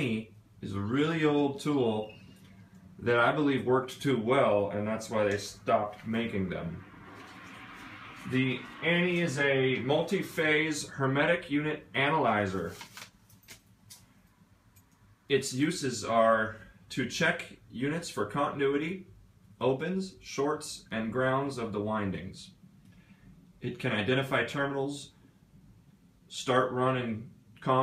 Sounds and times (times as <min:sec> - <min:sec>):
Speech: 0:00.0 - 0:02.1, 0:03.0 - 0:06.9, 0:08.3 - 0:12.8, 0:15.3 - 0:22.6, 0:23.6 - 0:25.2, 0:26.3 - 0:27.8.